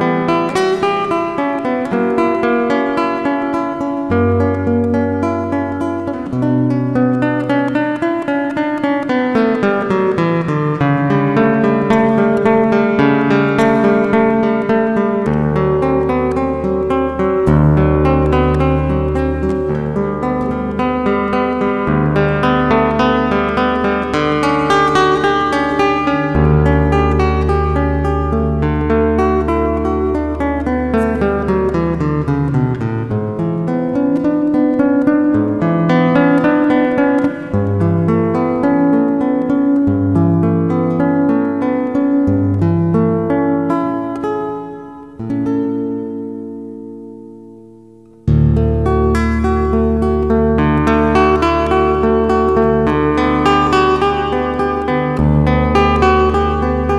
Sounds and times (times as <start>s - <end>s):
Zither: 0.0s - 47.5s.